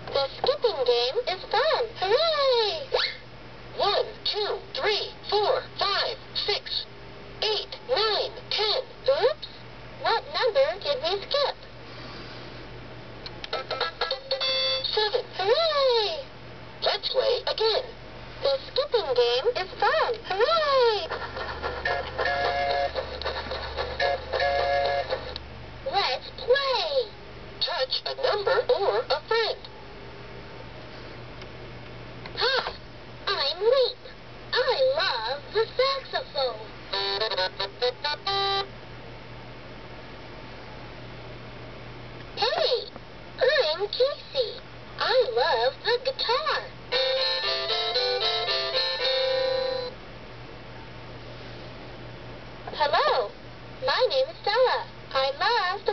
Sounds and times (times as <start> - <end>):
Speech: 0.1 - 3.2, 3.8 - 11.6, 14.9 - 21.1, 25.9 - 29.7, 32.4 - 36.7, 42.4 - 46.7, 52.7 - 55.9.